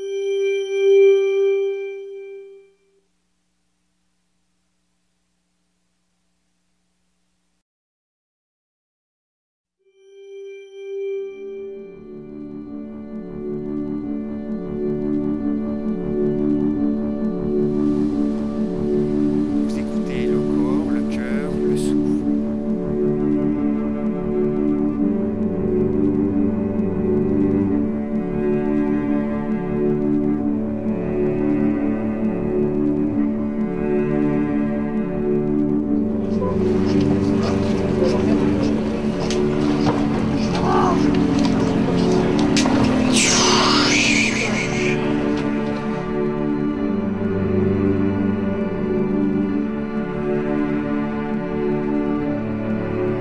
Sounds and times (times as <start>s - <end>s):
Music: 0.0s - 3.1s, 9.7s - 53.2s.